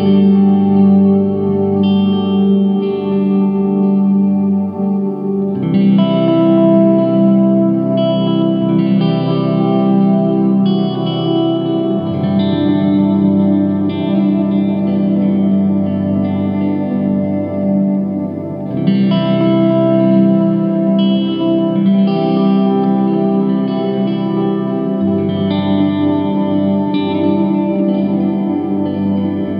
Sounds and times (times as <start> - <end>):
Electric guitar: 0.0 - 29.5.